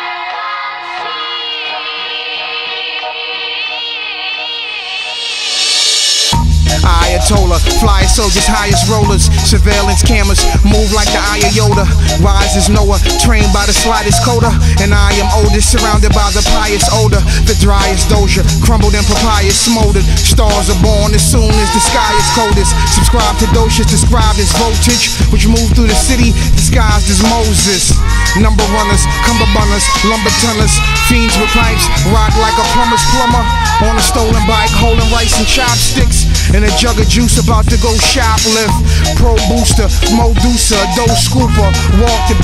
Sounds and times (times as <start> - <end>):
Music: 0.0 - 42.4.